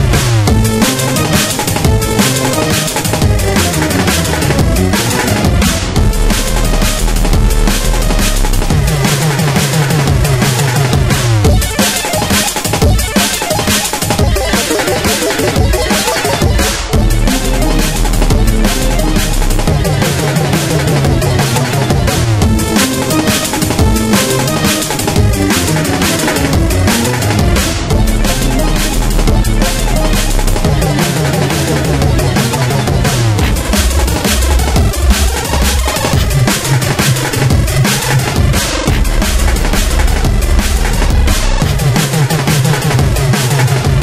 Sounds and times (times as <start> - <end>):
Bass drum: 0.0 - 44.0
Drum kit: 0.0 - 44.0
Drum roll: 0.0 - 44.0.